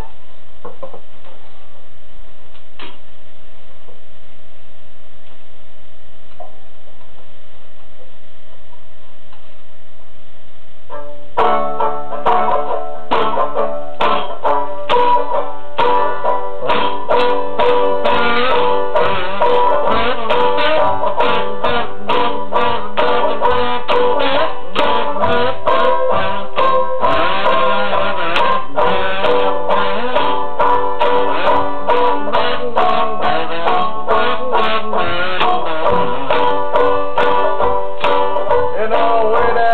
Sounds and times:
Music: 10.9 - 39.7.

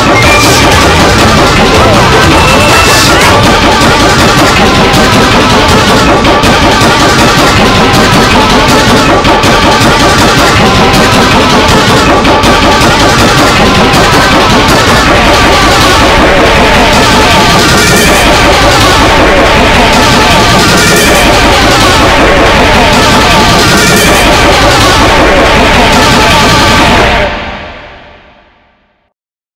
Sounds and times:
Music: 0.0 - 29.2.

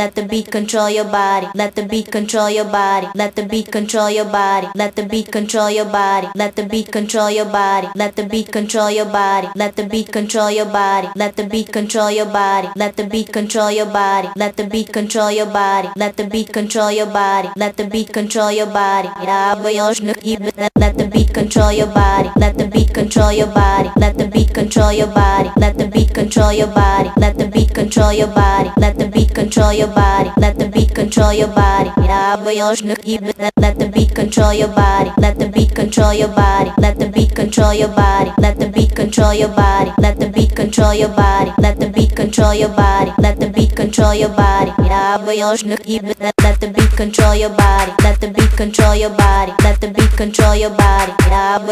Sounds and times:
Techno: 20.8 - 32.4, 33.6 - 45.1, 46.4 - 51.6.

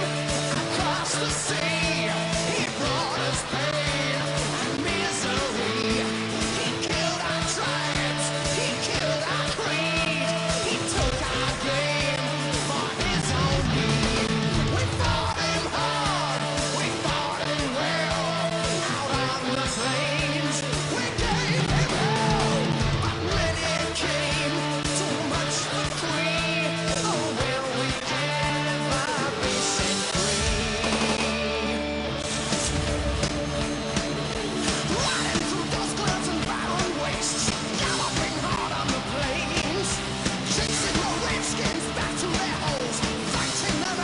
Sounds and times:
Music: 0.0 - 44.0.

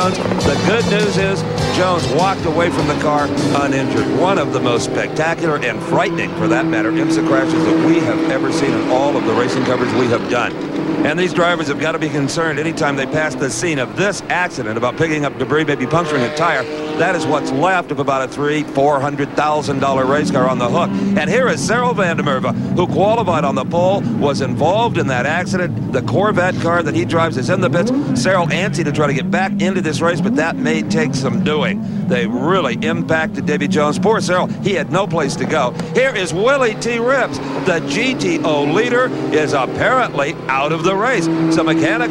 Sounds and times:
Speech: 0.0 - 42.1.

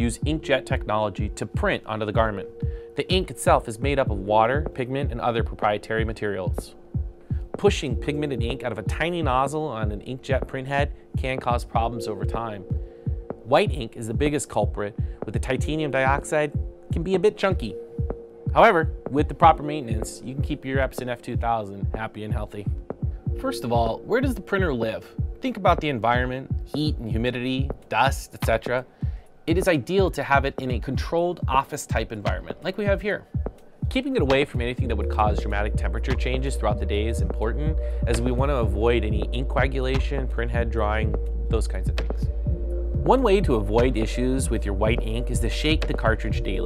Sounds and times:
Speech: 0.0 - 6.8, 7.6 - 12.7, 13.5 - 17.8, 18.5 - 22.8, 23.4 - 28.9, 29.5 - 33.3, 33.9 - 42.3, 43.0 - 46.6
Music: 0.0 - 46.6.

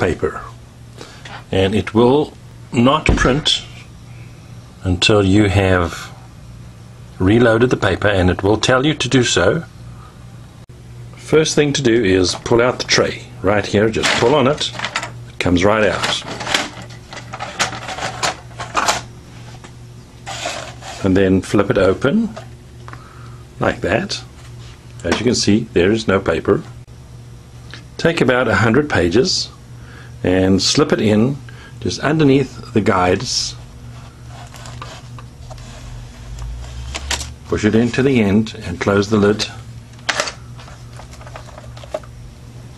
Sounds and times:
Speech: 0.0 - 0.6, 1.5 - 3.9, 4.8 - 6.2, 7.2 - 9.7, 11.2 - 14.8, 15.4 - 16.4, 21.0 - 22.4, 23.6 - 24.3, 25.0 - 26.8, 28.0 - 29.6, 30.2 - 33.7, 37.5 - 39.7.

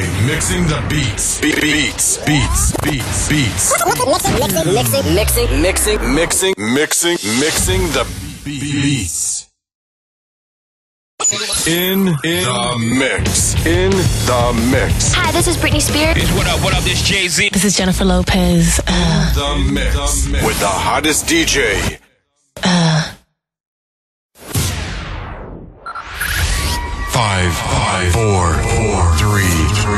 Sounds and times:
Speech: 0.0 - 9.5, 11.6 - 22.0, 27.1 - 29.9.

